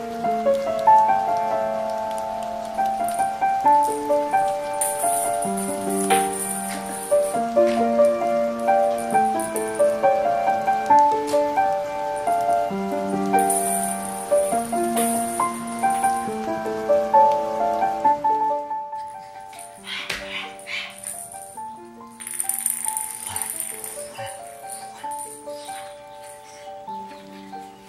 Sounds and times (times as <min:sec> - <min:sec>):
Music: 0:00.0 - 0:27.8.